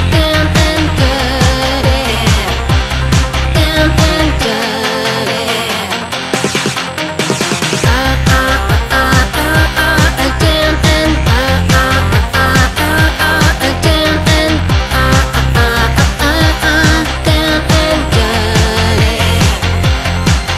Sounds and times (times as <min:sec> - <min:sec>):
Electronica: 0:00.0 - 0:20.5.